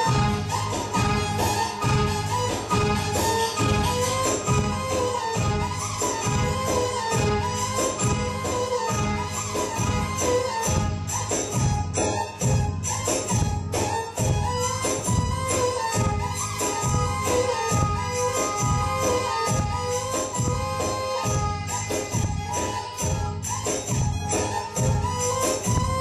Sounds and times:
Electronica: 0:00.0 - 0:26.0.

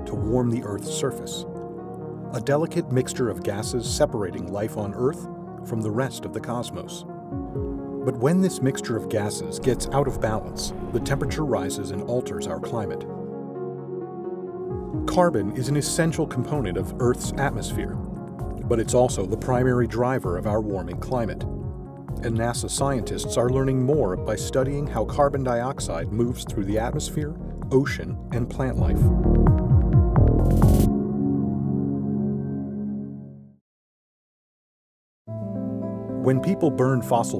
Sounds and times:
Speech: 0:00.0 - 0:01.5, 0:02.3 - 0:07.1, 0:08.0 - 0:13.1, 0:15.1 - 0:18.0, 0:18.6 - 0:21.5, 0:22.2 - 0:29.1, 0:36.2 - 0:37.4
Music: 0:00.0 - 0:33.6, 0:35.3 - 0:37.4.

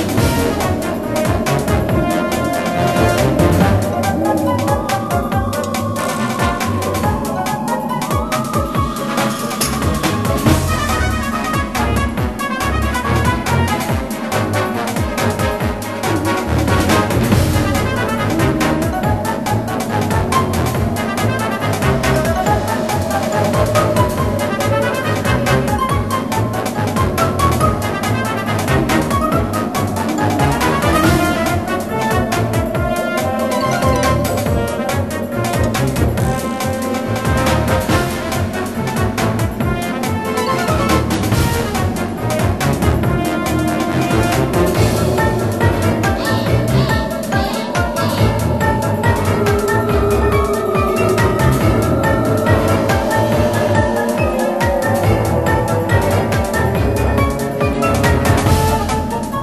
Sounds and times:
Music: 0:00.0 - 0:59.4.

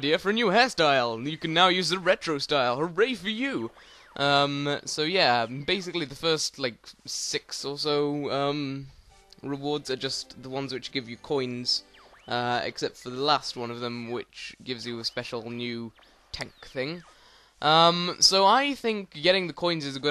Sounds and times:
Speech: 0:00.0 - 0:20.1.

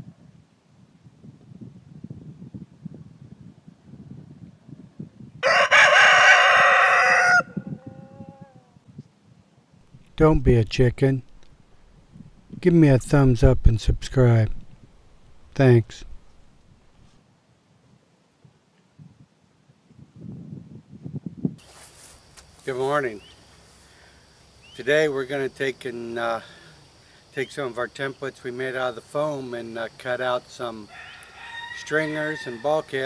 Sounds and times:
Speech: 0:10.2 - 0:11.2, 0:12.6 - 0:14.6, 0:15.6 - 0:16.1, 0:22.6 - 0:23.3, 0:24.8 - 0:26.5, 0:27.4 - 0:30.9, 0:31.8 - 0:33.0.

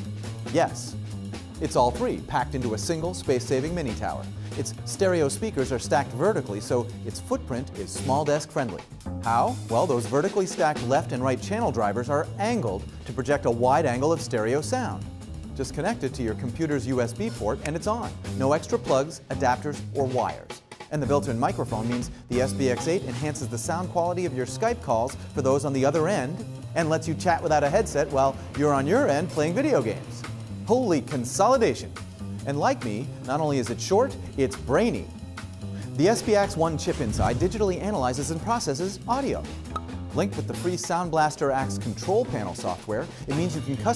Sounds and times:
Music: 0:00.0 - 0:43.9
Speech: 0:00.5 - 0:01.0, 0:01.6 - 0:15.0, 0:15.6 - 0:35.1, 0:35.9 - 0:39.5, 0:40.1 - 0:43.9.

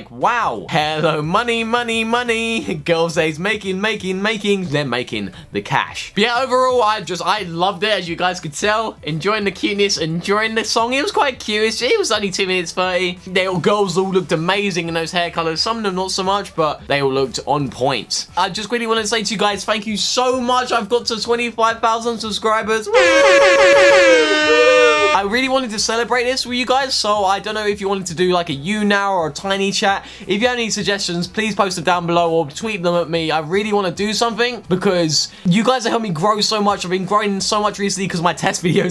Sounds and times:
Speech: 0:00.0 - 0:23.0, 0:25.2 - 0:38.9
Inside, small room: 0:00.0 - 0:38.9
Air horn, truck horn: 0:22.9 - 0:25.2.

